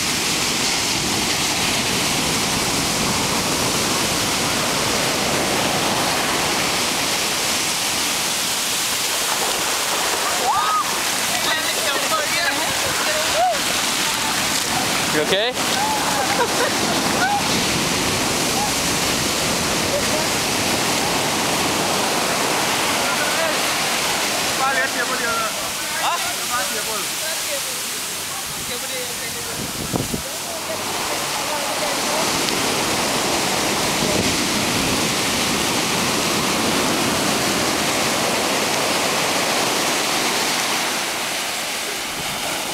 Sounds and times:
Waves, surf: 0.0 - 42.7
Wind noise (microphone): 28.4 - 30.4, 32.2 - 39.8.

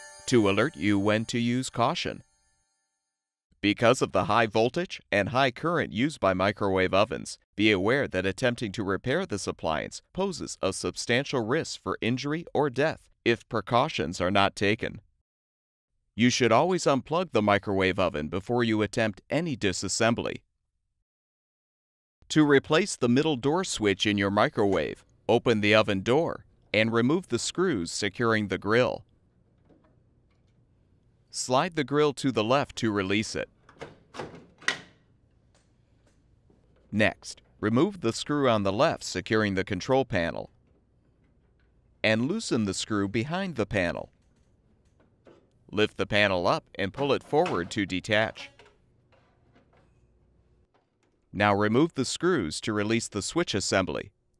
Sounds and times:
Speech: 0.3 - 2.2, 3.6 - 15.0, 16.2 - 20.4, 22.3 - 29.0, 31.3 - 33.5, 36.9 - 40.5, 42.0 - 44.1, 45.7 - 48.5, 51.4 - 54.1.

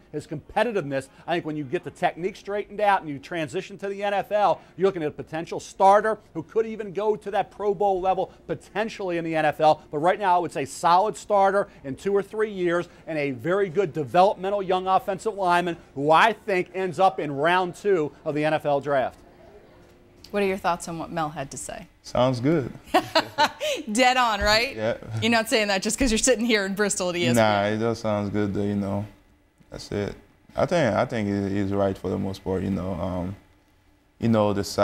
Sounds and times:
Female speech, woman speaking: 20.3 - 21.9, 23.9 - 27.6.

